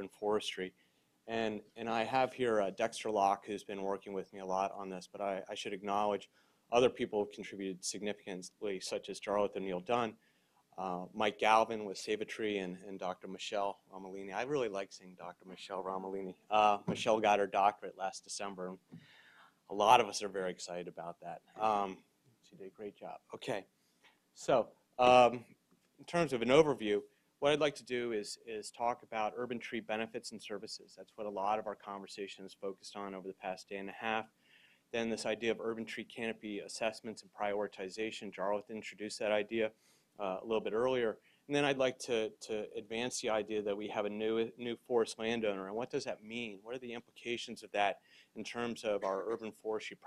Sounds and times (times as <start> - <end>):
Speech: 0.0 - 10.2, 10.8 - 18.8, 19.7 - 23.7, 24.4 - 34.3, 35.0 - 50.0.